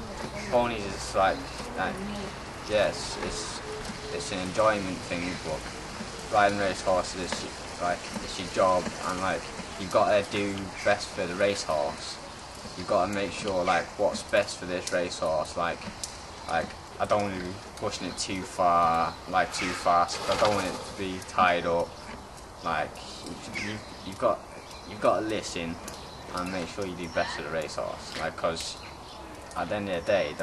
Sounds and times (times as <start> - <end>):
Speech: 0.0 - 3.6, 4.2 - 5.6, 6.3 - 12.2, 12.8 - 15.8, 16.5 - 21.9, 22.6 - 28.8, 29.6 - 30.4
Outside, rural or natural: 0.0 - 30.4.